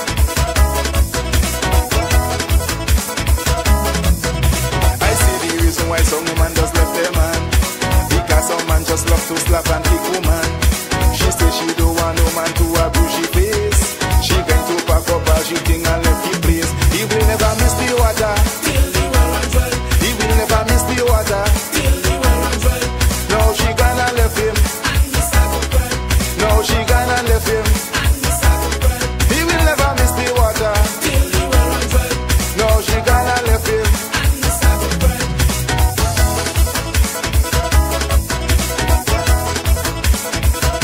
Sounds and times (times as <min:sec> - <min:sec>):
Music: 0:00.0 - 0:40.8.